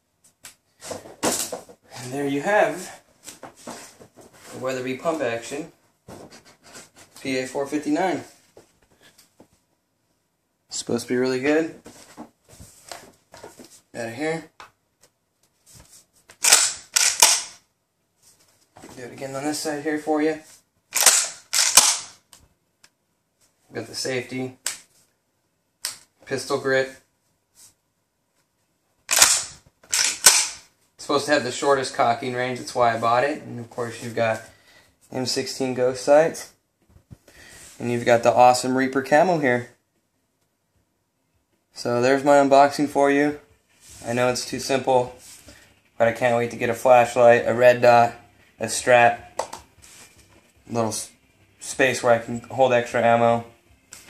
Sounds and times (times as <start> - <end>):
Inside, small room: 0.0 - 54.1
Speech: 1.9 - 3.0, 4.5 - 5.8, 7.2 - 8.4, 10.7 - 11.8, 13.9 - 14.6, 18.9 - 20.5, 23.7 - 24.6, 26.2 - 27.1, 31.0 - 34.5, 35.1 - 36.6, 37.8 - 39.8, 41.8 - 45.2, 46.0 - 49.3, 50.7 - 53.5.